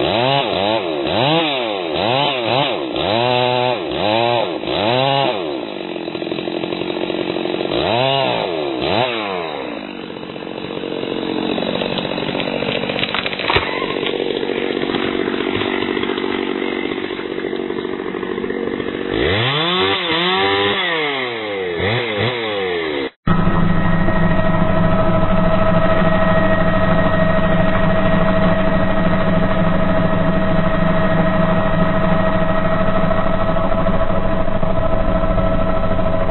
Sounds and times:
Chainsaw: 0.0 - 36.3.

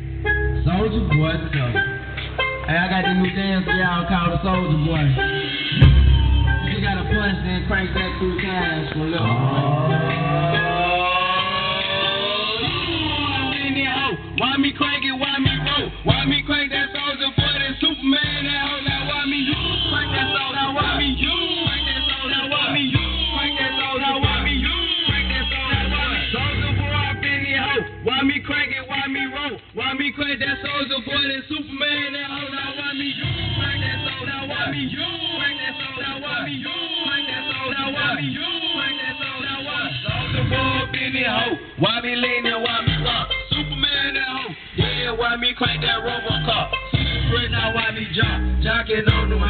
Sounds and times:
Music: 0.0 - 49.4.

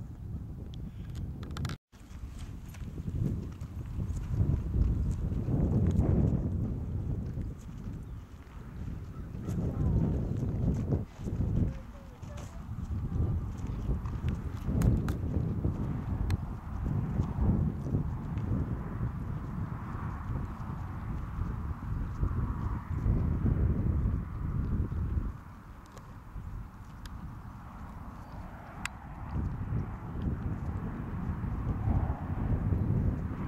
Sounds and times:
Clip-clop: 0.0 - 33.4.

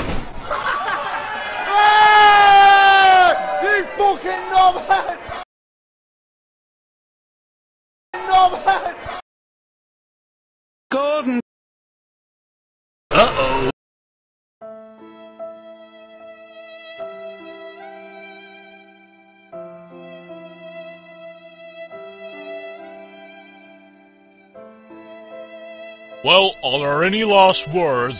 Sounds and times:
Music: 14.6 - 28.1.

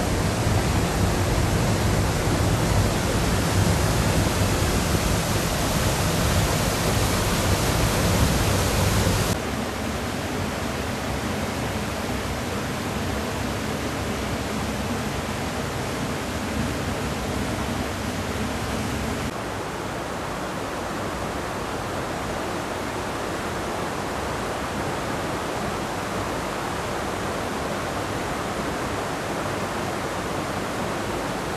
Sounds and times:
Stream: 0.0 - 31.5
Waterfall: 0.0 - 31.5.

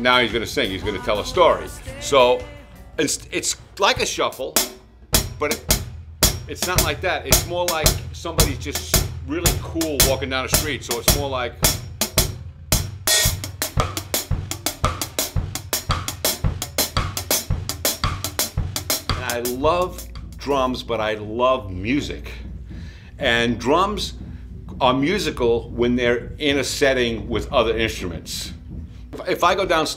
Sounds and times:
Speech: 0.0 - 4.6, 5.4 - 5.7, 6.5 - 11.6, 19.2 - 22.5, 23.2 - 24.2, 24.8 - 28.6, 29.2 - 29.9
Bass drum: 0.0 - 29.9
Drum kit: 0.0 - 29.9
Cymbal: 4.4 - 20.9.

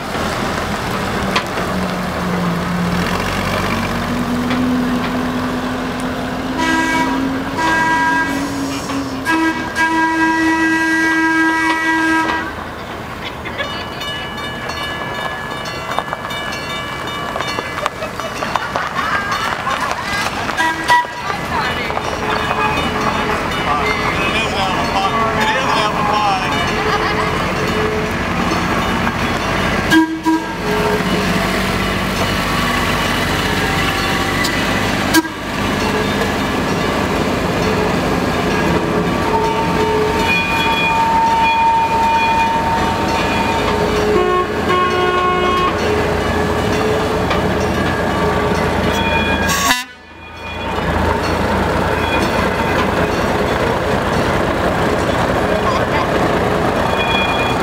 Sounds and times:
Vehicle: 0.0 - 57.6
Speech: 23.6 - 26.8, 55.5 - 56.2.

